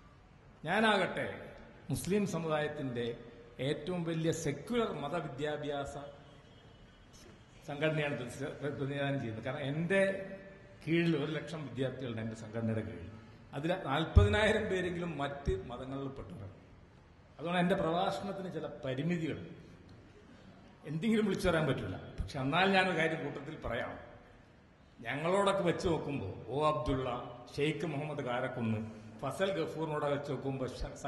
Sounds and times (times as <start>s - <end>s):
Narration, monologue: 0.0s - 31.0s
Male speech, man speaking: 0.6s - 6.2s, 7.2s - 16.6s, 17.4s - 19.6s, 20.8s - 24.1s, 25.0s - 31.0s.